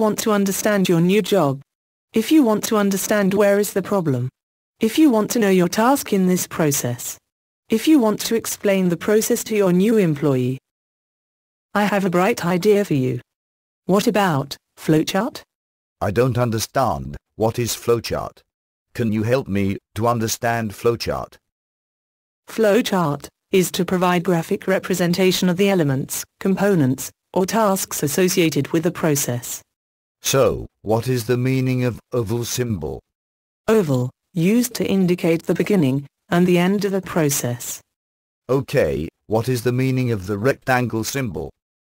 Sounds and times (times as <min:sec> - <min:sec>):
Speech: 0:00.0 - 0:01.6, 0:02.2 - 0:10.6, 0:11.8 - 0:13.2, 0:13.9 - 0:18.4, 0:19.0 - 0:21.4, 0:22.5 - 0:29.6, 0:30.2 - 0:33.0, 0:33.7 - 0:37.8, 0:38.5 - 0:41.6.